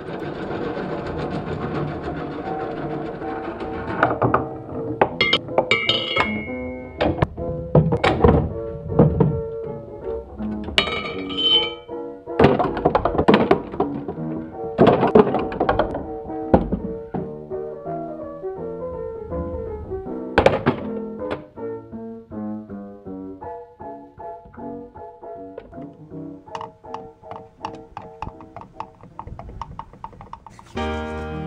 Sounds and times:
Music: 0:01.3 - 0:29.0, 0:30.6 - 0:31.4
Thunk: 0:20.4 - 0:21.4.

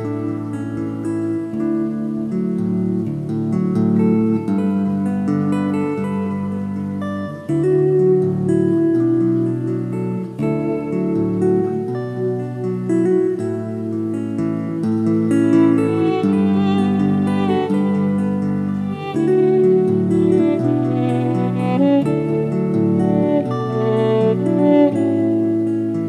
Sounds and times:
Violin, fiddle: 0:15.6 - 0:26.0.

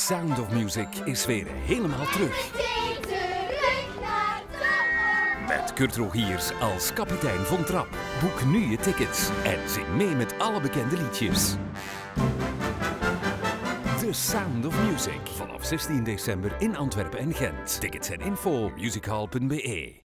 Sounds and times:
Speech: 0:00.0 - 0:02.5, 0:05.5 - 0:11.6, 0:14.0 - 0:20.0
Exciting music: 0:00.0 - 0:19.3.

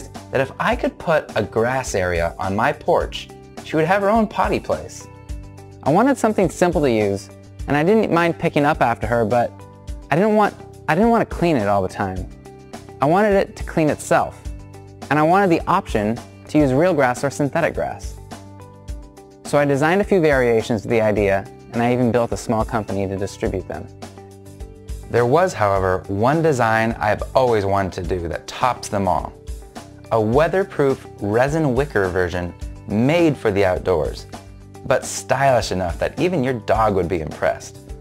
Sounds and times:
Speech: 0:00.0 - 0:05.1, 0:05.8 - 0:09.5, 0:10.1 - 0:12.3, 0:13.0 - 0:14.4, 0:15.1 - 0:18.2, 0:19.5 - 0:23.9, 0:25.1 - 0:29.4, 0:30.1 - 0:37.8
Music: 0:00.0 - 0:38.0.

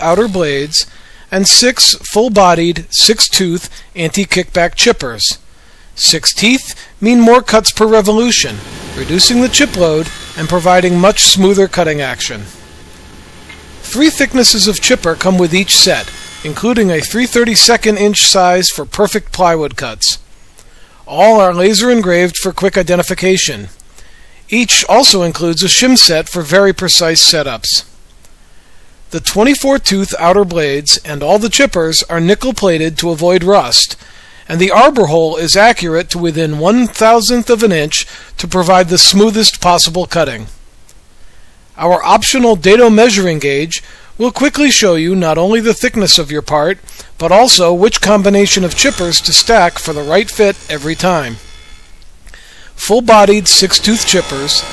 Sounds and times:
Speech: 0:00.0 - 0:05.4, 0:06.0 - 0:12.6, 0:13.8 - 0:20.3, 0:21.0 - 0:23.8, 0:24.5 - 0:27.9, 0:29.1 - 0:40.6, 0:41.8 - 0:51.4, 0:52.8 - 0:54.7.

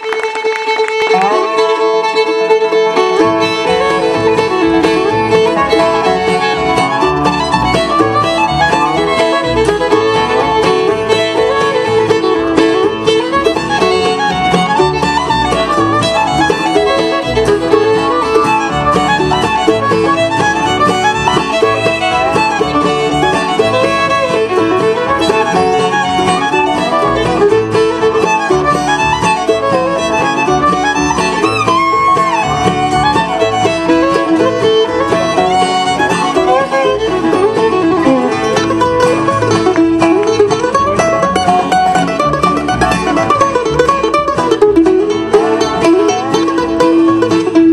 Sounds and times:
Music: 0:00.0 - 0:47.7.

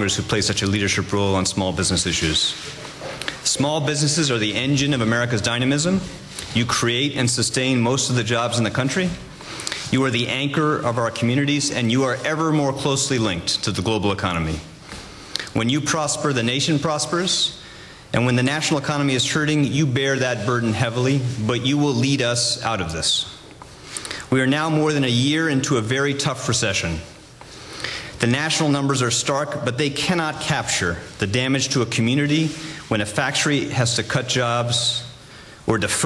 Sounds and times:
Male speech, man speaking: 0:00.0 - 0:02.7, 0:03.4 - 0:09.3, 0:09.9 - 0:14.7, 0:15.6 - 0:17.6, 0:18.2 - 0:23.4, 0:24.3 - 0:27.1, 0:28.2 - 0:36.0
Narration, monologue: 0:00.0 - 0:36.0.

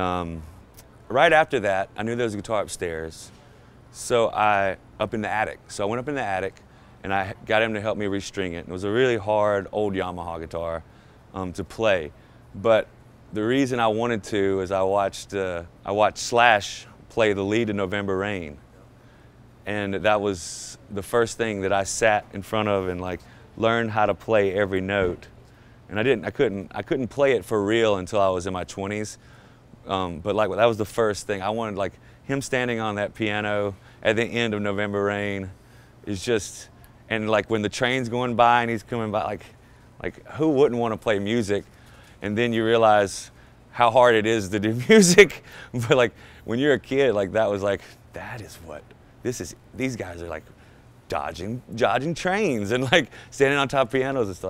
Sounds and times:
Speech: 0:00.0 - 0:18.6, 0:19.6 - 0:29.2, 0:29.8 - 0:50.5, 0:51.1 - 0:54.4.

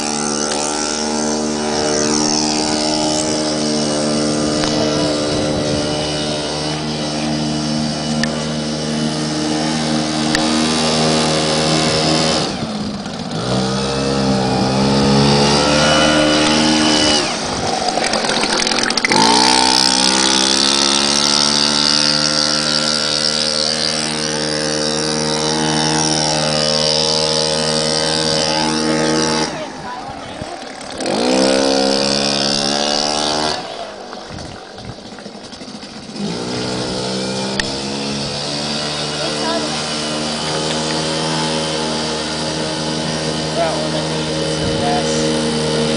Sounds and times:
Motorboat, speedboat: 0:00.0 - 0:45.9.

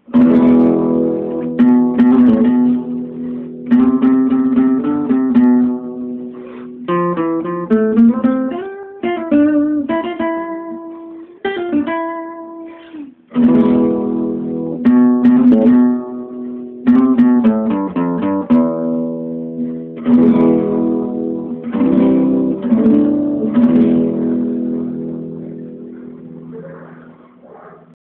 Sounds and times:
Acoustic guitar: 0:00.0 - 0:28.0.

